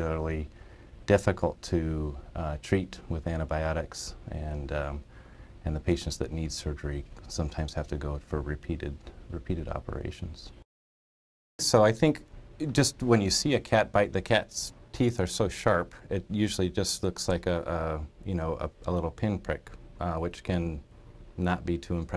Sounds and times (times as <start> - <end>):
Speech: 0.0 - 0.5, 1.1 - 10.6, 11.6 - 22.1.